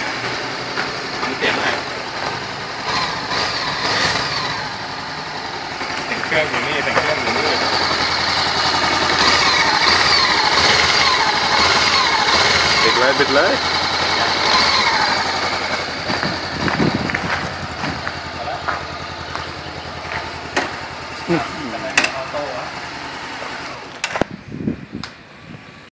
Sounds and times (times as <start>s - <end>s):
Speech: 1.2s - 1.9s, 6.1s - 7.8s, 12.8s - 13.6s, 18.4s - 18.8s, 21.3s - 22.8s.